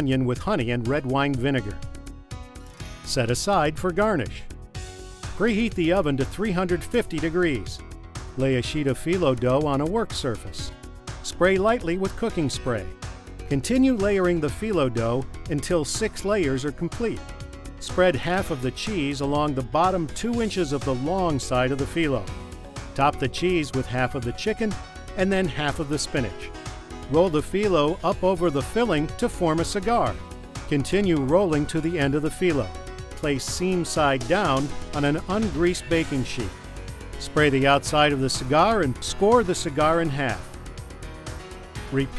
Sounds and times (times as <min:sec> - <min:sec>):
Speech: 0:00.0 - 0:01.8, 0:03.1 - 0:04.5, 0:05.4 - 0:07.8, 0:08.4 - 0:12.9, 0:13.5 - 0:17.2, 0:17.8 - 0:22.3, 0:23.0 - 0:26.5, 0:27.1 - 0:36.5, 0:37.2 - 0:40.5, 0:41.9 - 0:42.1
Music: 0:00.0 - 0:42.1.